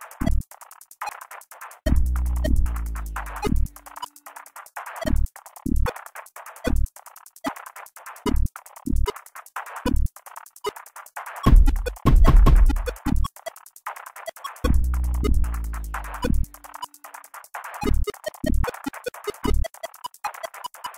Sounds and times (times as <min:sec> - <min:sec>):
Drum machine: 0:00.0 - 0:20.9.